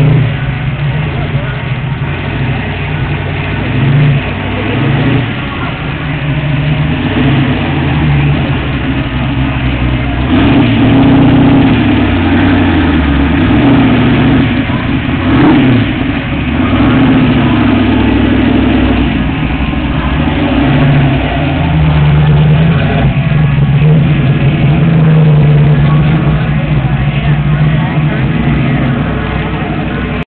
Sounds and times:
Speech: 0.0 - 3.2, 4.1 - 6.7, 19.8 - 30.2
Car: 0.0 - 30.2
Heavy engine (low frequency): 0.0 - 30.2.

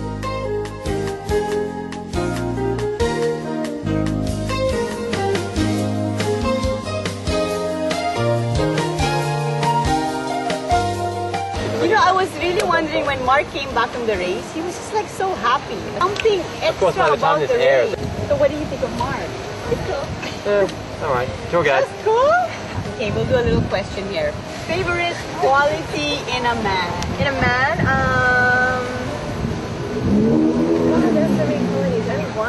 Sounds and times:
Music: 0.0 - 20.1, 20.8 - 29.9
Outside, urban or manmade: 0.0 - 32.4.

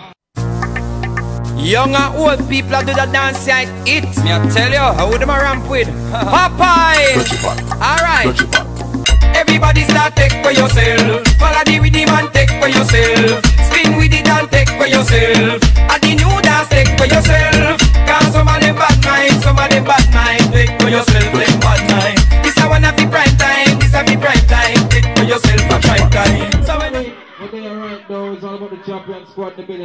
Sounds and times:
Music: 0.4 - 27.2.

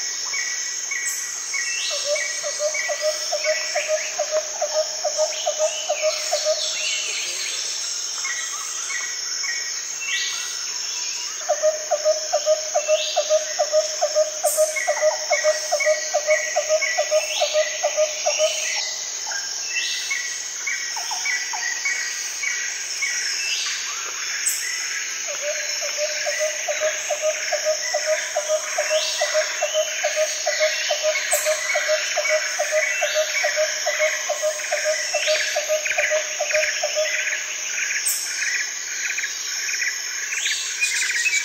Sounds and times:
Outside, rural or natural: 0.0 - 41.4.

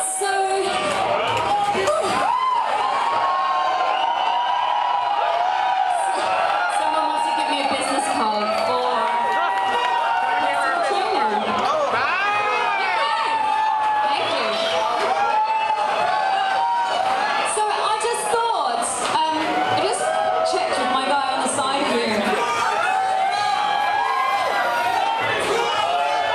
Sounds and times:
Speech: 17.5 - 22.4.

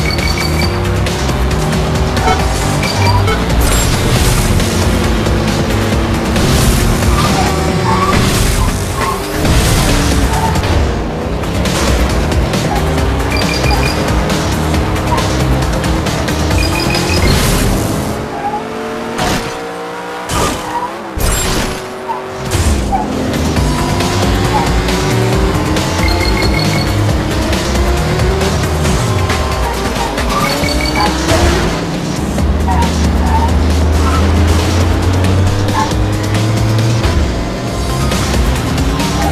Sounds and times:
Music: 0.0 - 20.5, 21.1 - 39.3.

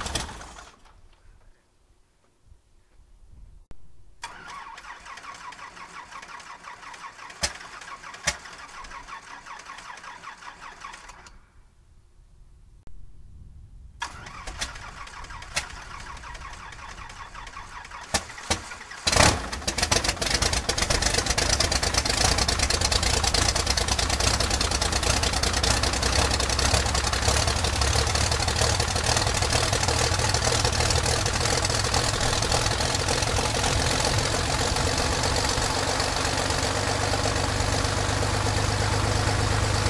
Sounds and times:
Vehicle: 4.2 - 11.5, 14.0 - 39.8
Heavy engine (low frequency): 14.0 - 39.8.

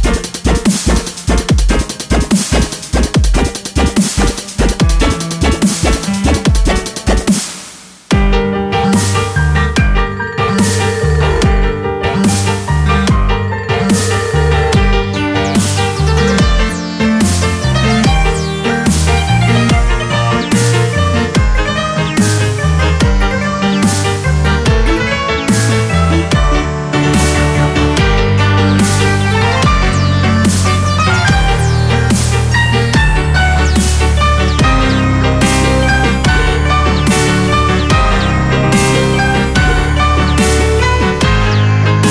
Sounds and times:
Dubstep: 0.0 - 8.2, 10.5 - 42.1.

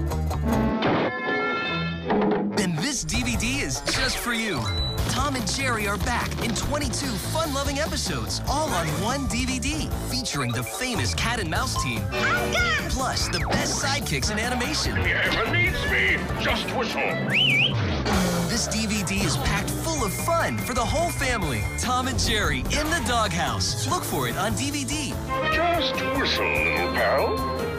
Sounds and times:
Music: 0.0 - 27.7
Speech: 2.6 - 12.0, 18.5 - 27.4.

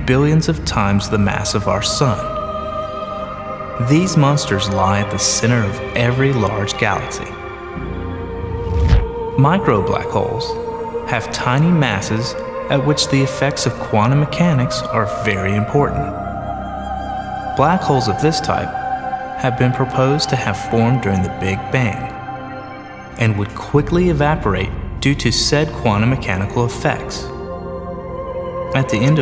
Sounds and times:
Speech: 0.0 - 2.4, 3.8 - 7.4, 9.4 - 16.2, 17.6 - 18.7, 19.4 - 22.2, 23.2 - 27.3, 28.7 - 29.2
Music: 0.0 - 29.2.

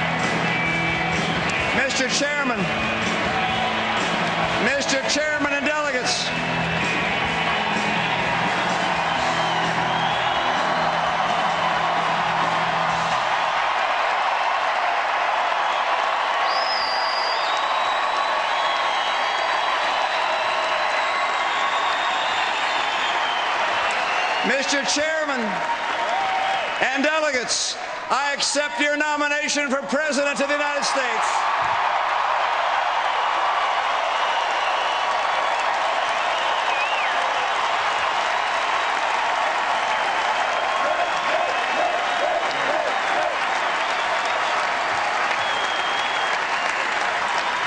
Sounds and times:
Music: 0.0 - 5.4, 6.0 - 13.4.

